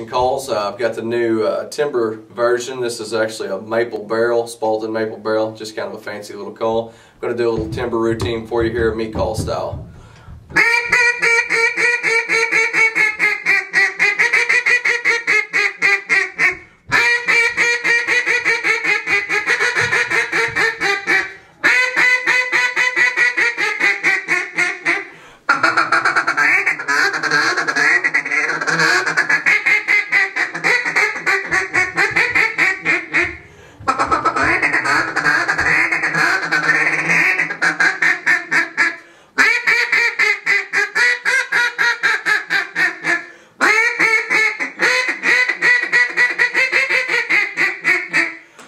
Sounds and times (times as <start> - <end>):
Quack: 10.6 - 48.4.